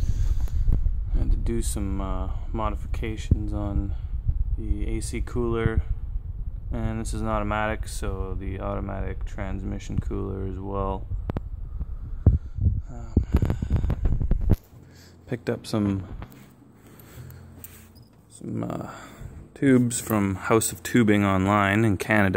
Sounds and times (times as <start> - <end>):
Speech: 1.1 - 4.0, 4.6 - 5.9, 6.7 - 11.1, 15.3 - 16.2, 18.3 - 22.3.